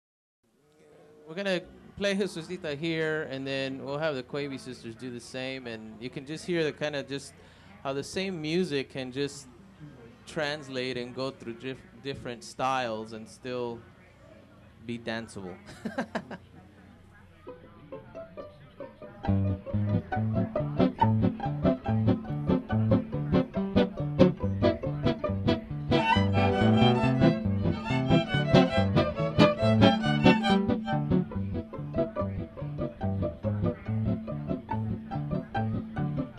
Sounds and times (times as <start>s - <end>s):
Swing music: 17.5s - 36.3s
Violin, fiddle: 23.8s - 36.3s.